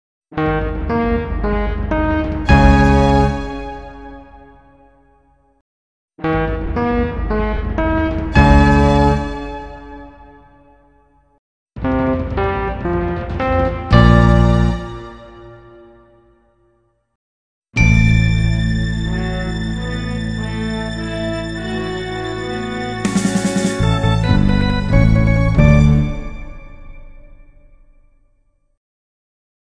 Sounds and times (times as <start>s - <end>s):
Music: 0.4s - 5.6s, 6.2s - 17.2s, 17.8s - 28.8s.